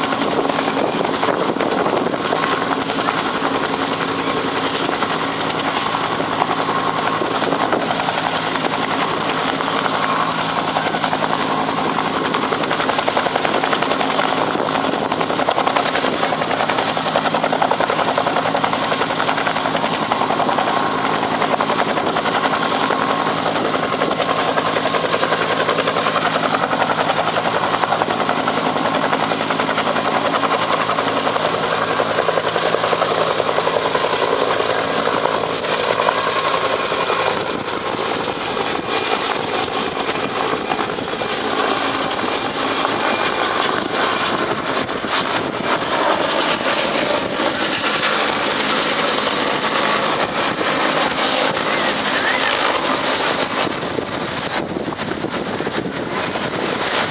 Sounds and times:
Helicopter: 0.0s - 57.1s.

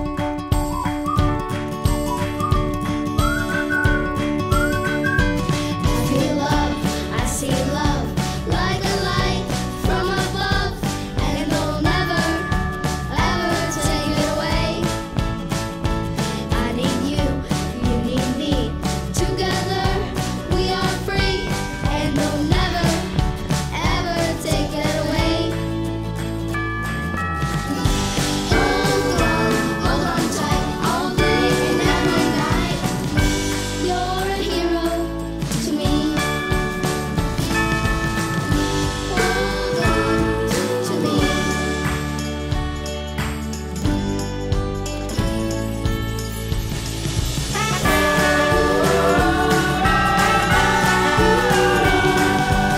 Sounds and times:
Music: 0.0s - 52.7s.

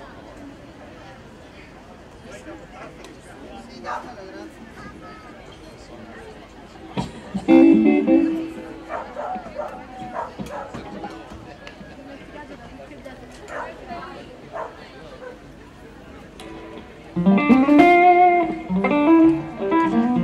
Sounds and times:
Speech: 0.0s - 17.2s
Music: 7.4s - 8.9s, 16.4s - 20.2s.

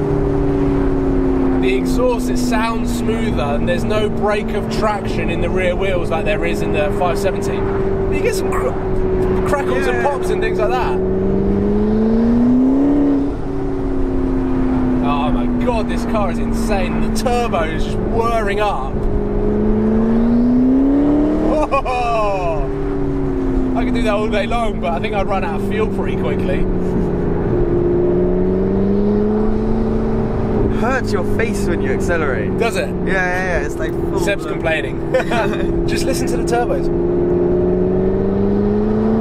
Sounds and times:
Car: 0.0s - 39.2s
Speech: 1.6s - 8.8s, 9.4s - 11.0s, 15.0s - 19.0s, 23.8s - 26.7s, 30.7s - 36.9s.

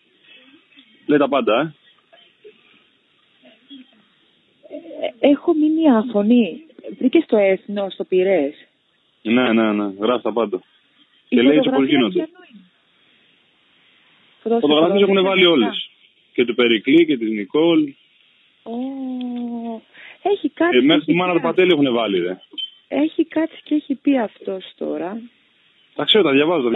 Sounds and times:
Speech: 11.4s - 12.6s, 14.5s - 18.0s, 26.0s - 26.7s.

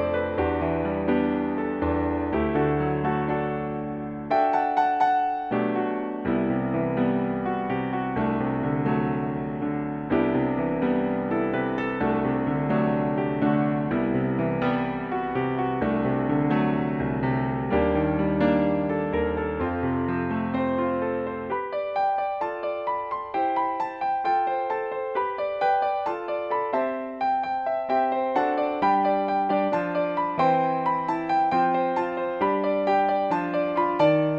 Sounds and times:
Music: 0.0s - 34.3s.

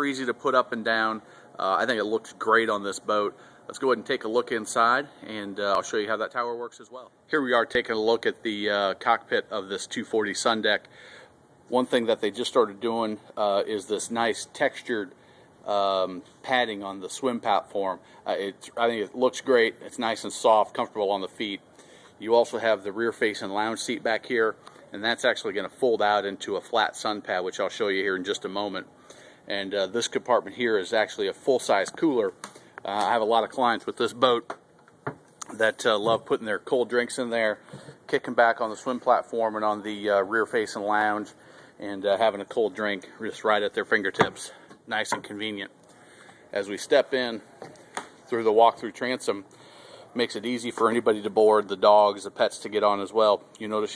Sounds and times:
Speech: 0.0s - 10.9s, 11.7s - 28.9s, 29.5s - 34.5s, 35.4s - 45.8s, 46.5s - 47.5s, 48.3s - 49.5s, 50.2s - 53.9s.

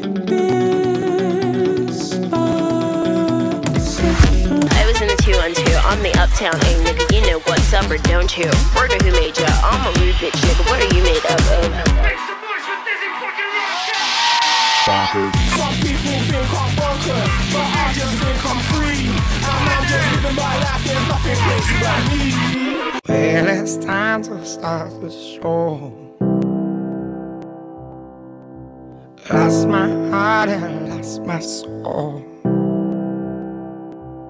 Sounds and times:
Pop music: 0.0s - 26.1s, 29.2s - 32.2s.

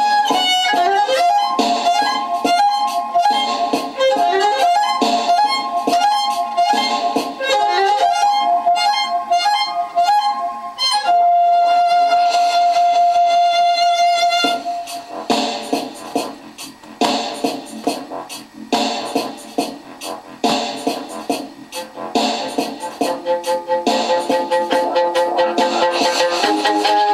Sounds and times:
Violin, fiddle: 0.0s - 14.8s, 23.0s - 27.1s.

